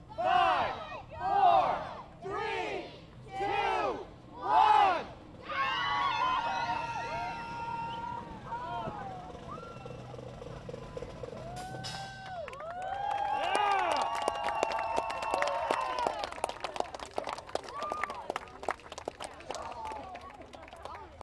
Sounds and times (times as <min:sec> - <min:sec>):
Speech: 0:16.6 - 0:21.2.